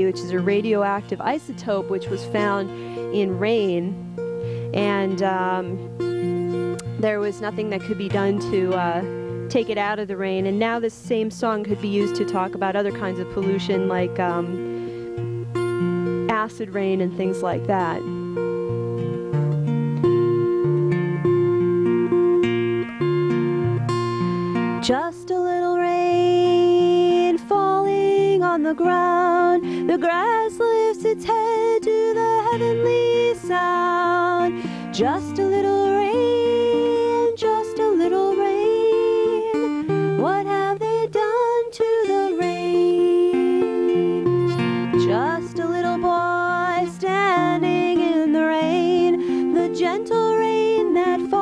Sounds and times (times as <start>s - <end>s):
Music: 0.0s - 51.4s.